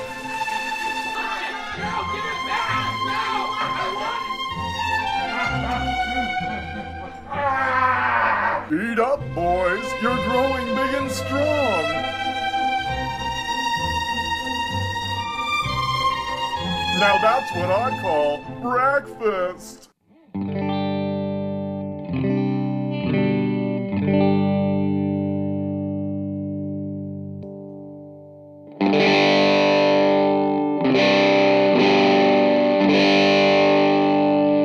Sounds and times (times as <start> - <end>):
Guitar: 0.0 - 34.6
Effects unit: 20.2 - 34.6.